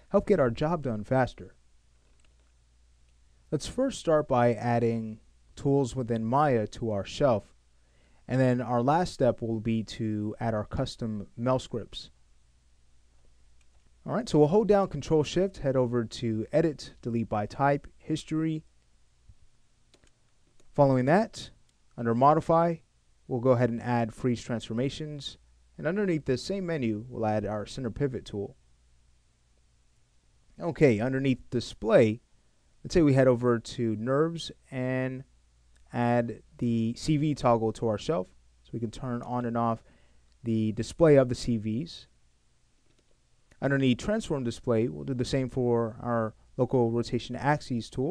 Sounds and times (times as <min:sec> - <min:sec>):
Speech: 0:00.1 - 0:01.6, 0:03.5 - 0:07.6, 0:08.3 - 0:12.2, 0:14.0 - 0:18.7, 0:20.7 - 0:28.6, 0:30.6 - 0:32.2, 0:32.8 - 0:35.3, 0:35.9 - 0:42.2, 0:43.6 - 0:48.1.